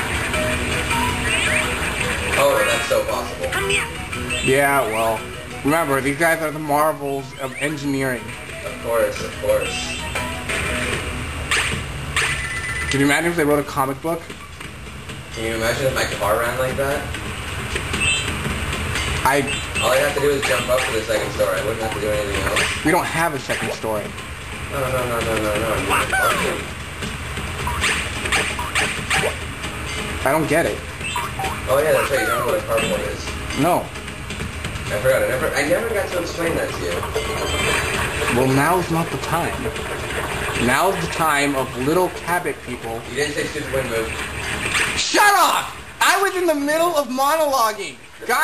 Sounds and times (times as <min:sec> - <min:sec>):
Music: 0:00.0 - 0:48.4.